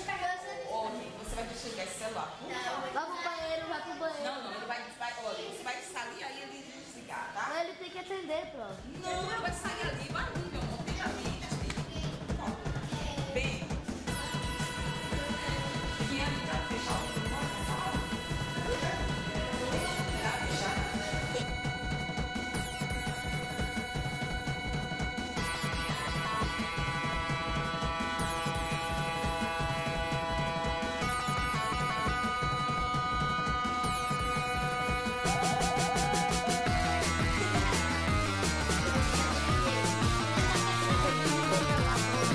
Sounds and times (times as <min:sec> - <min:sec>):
Music: 0:08.8 - 0:42.3.